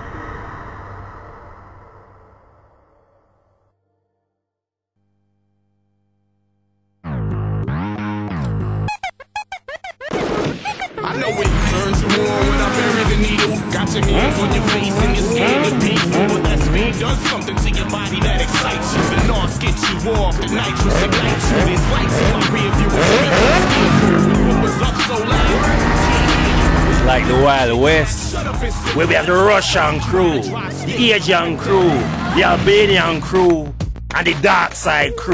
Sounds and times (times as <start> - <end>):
Music: 2.0 - 4.6, 7.0 - 35.3.